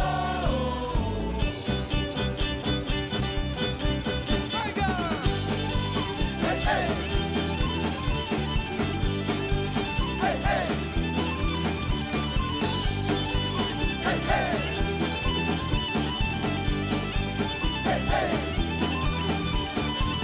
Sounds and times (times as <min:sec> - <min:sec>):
Rhythm and blues: 0:00.0 - 0:20.2.